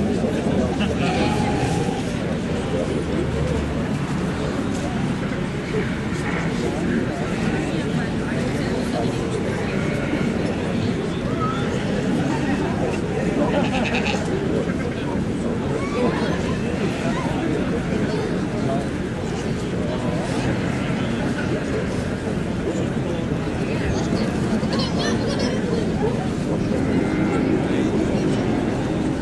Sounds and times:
Speech: 0.0 - 29.2.

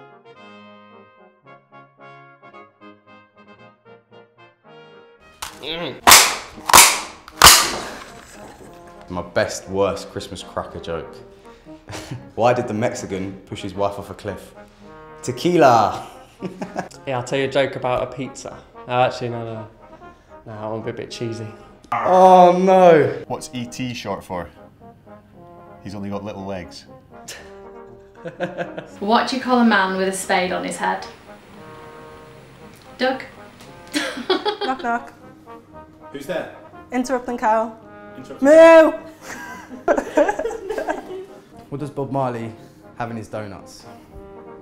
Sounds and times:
Music: 0.0 - 44.6.

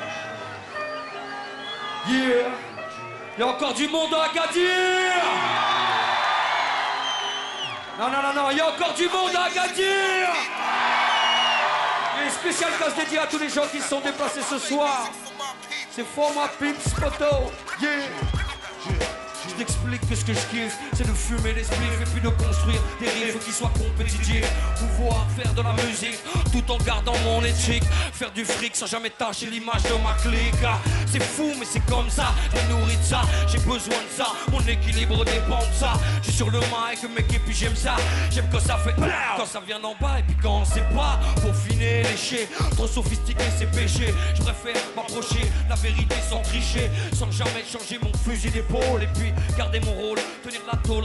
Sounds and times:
Music: 0.0 - 51.0.

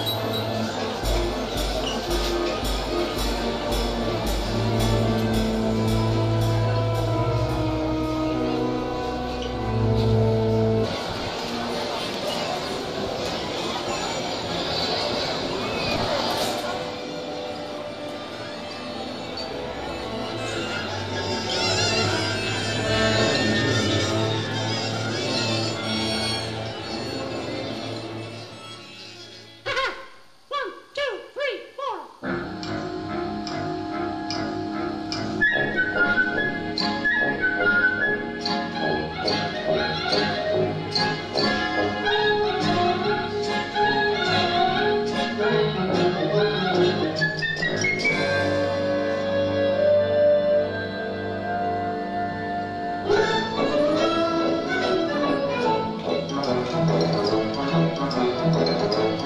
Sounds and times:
Music: 0.0 - 29.8, 32.2 - 59.2.

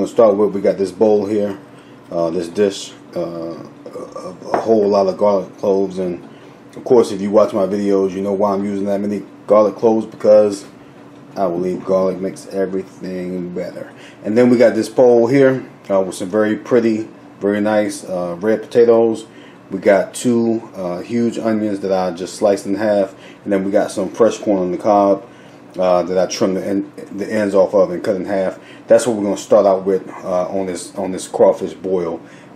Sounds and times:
Speech: 0.0 - 10.8, 11.4 - 32.2.

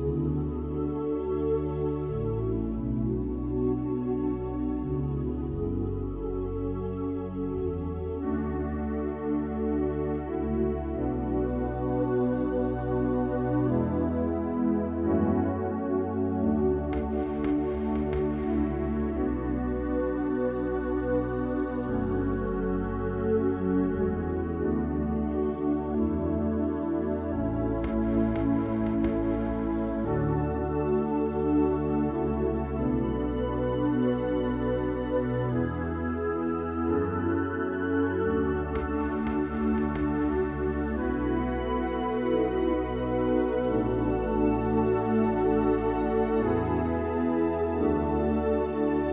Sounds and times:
New-age music: 0.0 - 49.1.

